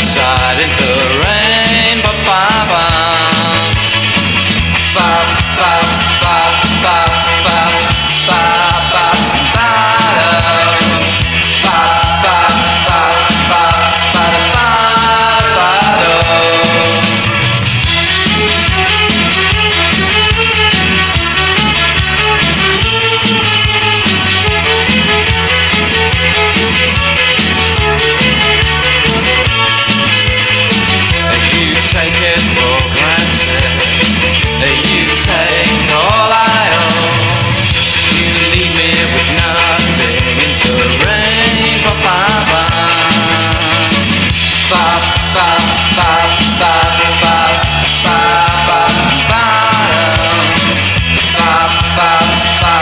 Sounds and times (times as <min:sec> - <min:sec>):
Music: 0:00.0 - 0:52.8.